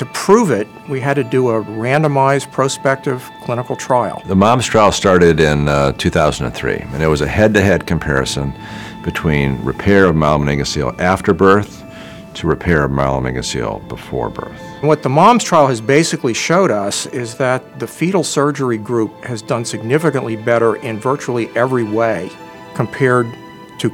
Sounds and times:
Speech: 0.0s - 11.7s, 12.4s - 23.9s
Music: 0.0s - 23.9s.

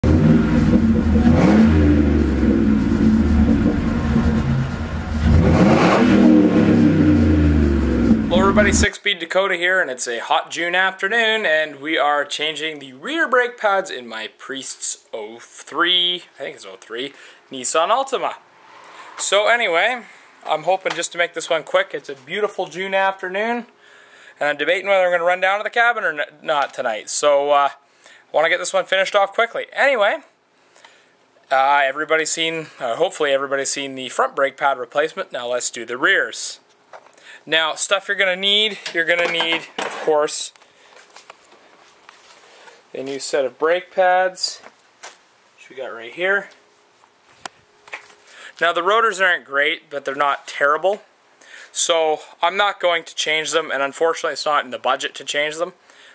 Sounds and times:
Vehicle: 0.0s - 8.9s
Speech: 8.3s - 18.4s, 19.2s - 23.7s, 24.4s - 30.3s, 31.5s - 36.6s, 37.4s - 40.6s, 42.9s - 44.7s, 45.6s - 46.6s, 48.6s - 51.1s, 51.7s - 55.8s.

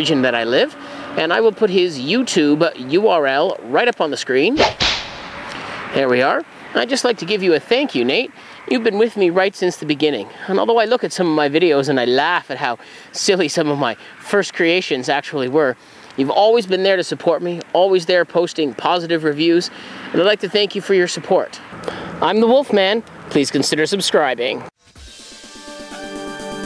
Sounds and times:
Speech: 0.0s - 4.6s, 5.9s - 24.7s
Outside, rural or natural: 0.0s - 25.4s.

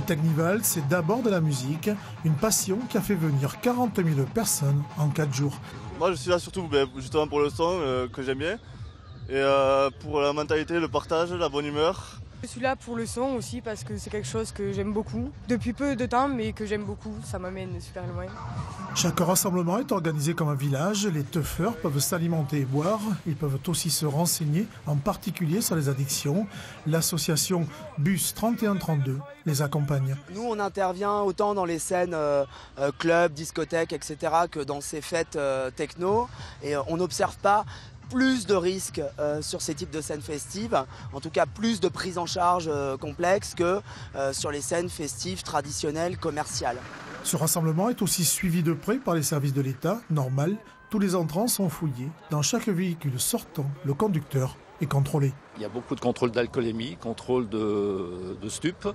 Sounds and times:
Speech: 0.0s - 8.6s, 18.9s - 58.9s
Music: 0.0s - 58.9s.

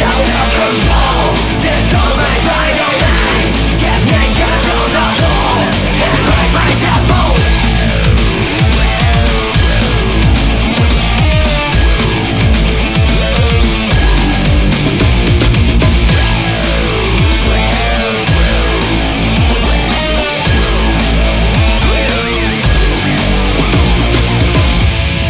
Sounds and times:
Angry music: 0.0s - 25.3s.

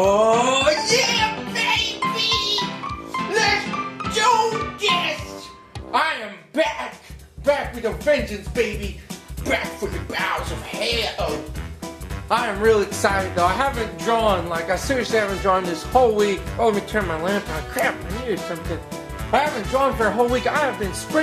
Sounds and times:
Speech: 0.0s - 11.5s, 12.3s - 21.2s
Music: 0.0s - 21.2s.

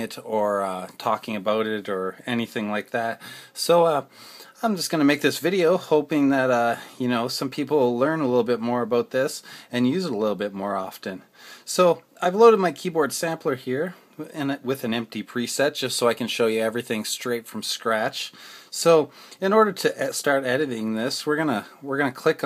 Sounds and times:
Speech: 0.0s - 22.4s.

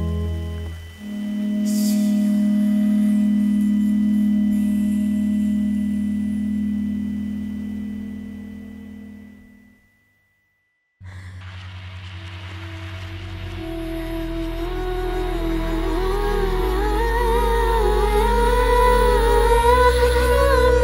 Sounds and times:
Music: 0.0s - 9.9s, 11.0s - 20.8s
Inside, small room: 0.0s - 20.8s.

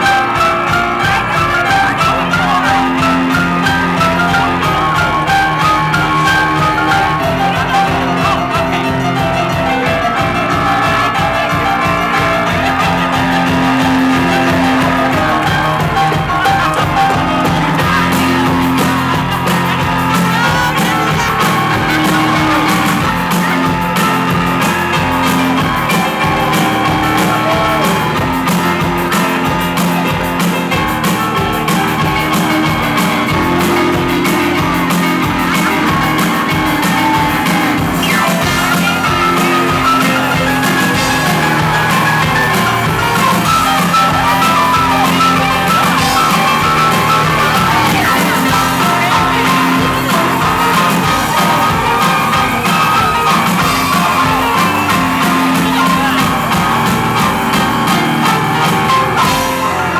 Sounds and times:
Crowd: 0.0s - 59.9s
Music: 0.0s - 59.9s.

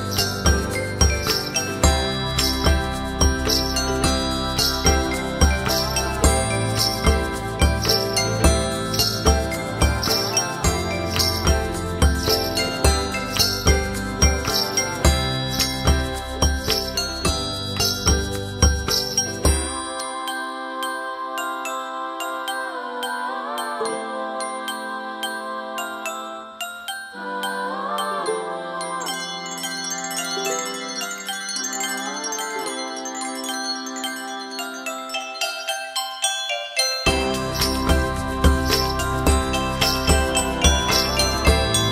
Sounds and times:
Glockenspiel: 0.0s - 41.9s.

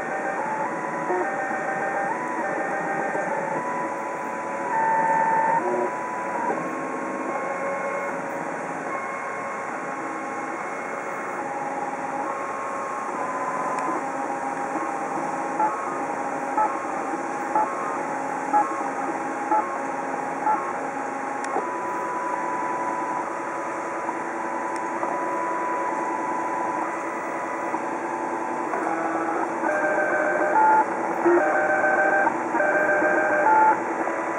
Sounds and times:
Printer: 0.0s - 34.3s.

